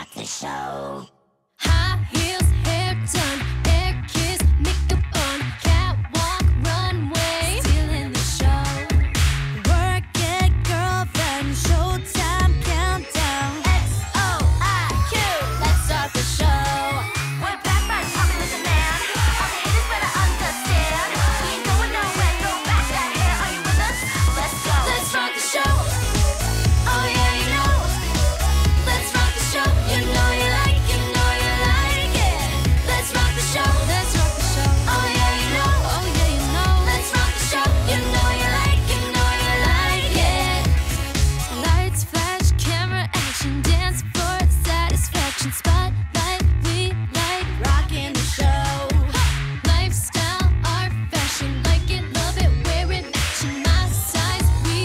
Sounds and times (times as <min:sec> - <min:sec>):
Music: 0:01.6 - 0:54.8.